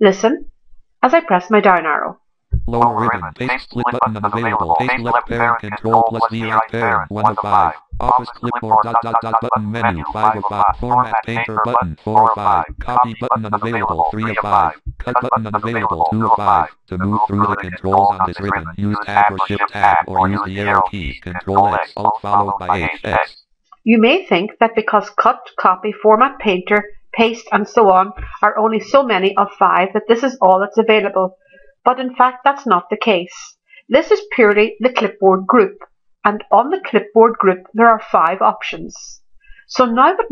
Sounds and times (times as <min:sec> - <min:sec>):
Speech: 0:00.0 - 0:00.4, 0:01.0 - 0:31.3, 0:31.9 - 0:40.3
Inside, small room: 0:00.0 - 0:40.3.